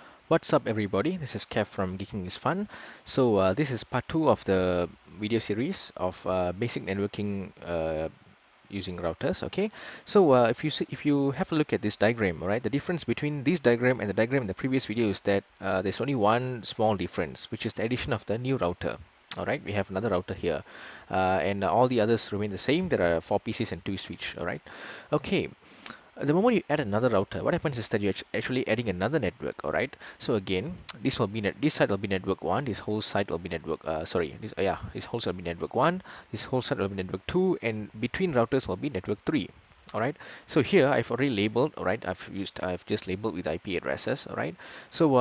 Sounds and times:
Speech: 0.3s - 45.2s.

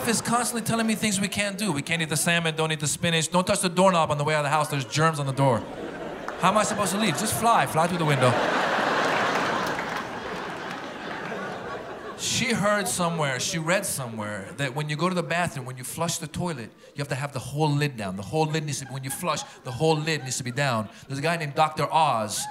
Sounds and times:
Speech: 0.0s - 5.6s, 6.4s - 8.5s, 12.2s - 22.5s
Laughter: 4.8s - 13.8s, 18.5s - 21.4s.

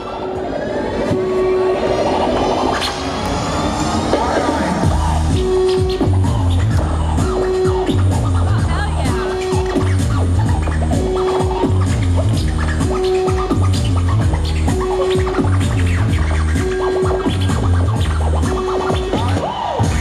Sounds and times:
Music: 0.0s - 20.0s
Speech: 8.3s - 9.8s.

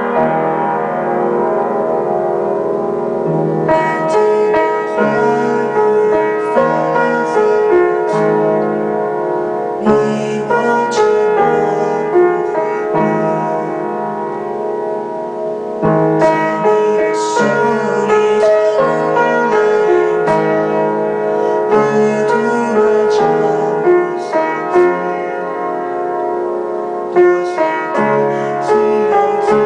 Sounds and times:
Music: 0.0s - 29.6s
Male singing: 3.8s - 8.7s, 9.8s - 13.9s, 16.2s - 25.5s, 27.2s - 29.6s.

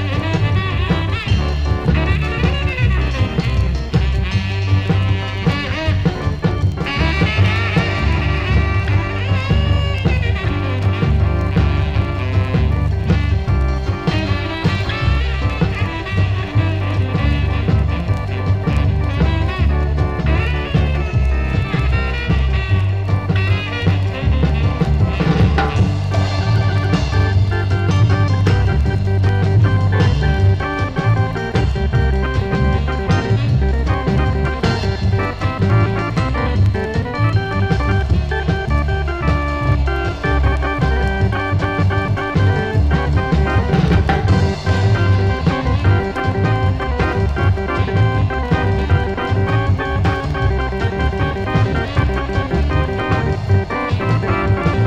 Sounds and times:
Progressive rock: 0.0s - 54.8s.

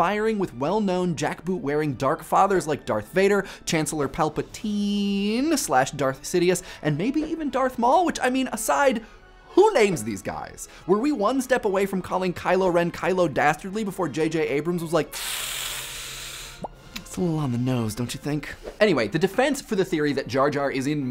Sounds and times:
Speech: 0.0s - 9.0s, 9.6s - 15.1s, 17.0s - 21.1s
Music: 0.0s - 21.1s.

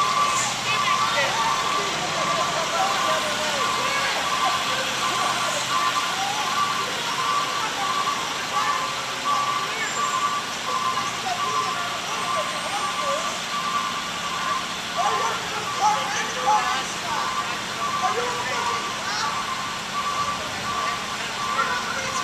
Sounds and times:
Speech: 0.0s - 13.4s, 14.3s - 22.2s
Reversing beeps: 0.0s - 22.2s.

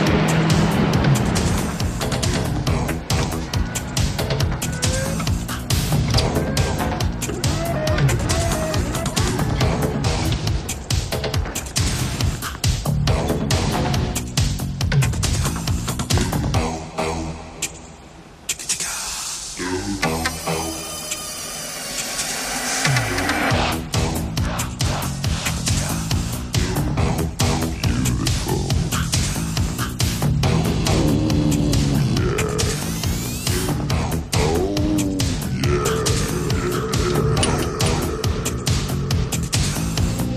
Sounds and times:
Music: 0.0s - 40.3s.

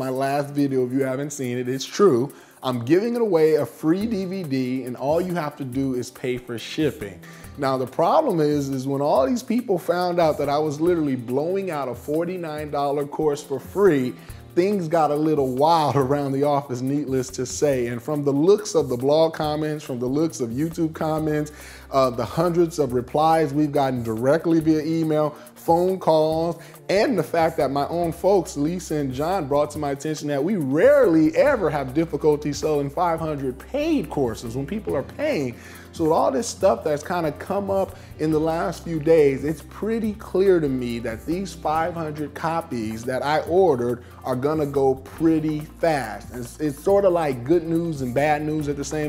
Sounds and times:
Music: 0.0s - 49.0s
Speech: 0.0s - 49.0s.

